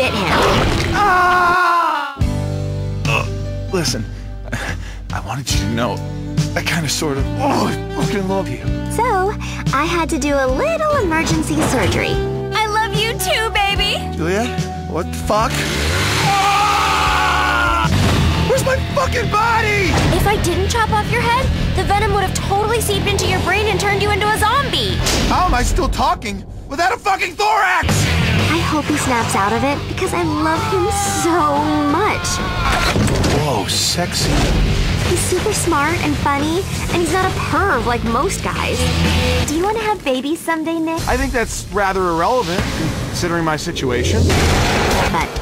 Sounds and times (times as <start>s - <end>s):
Music: 0.0s - 45.4s.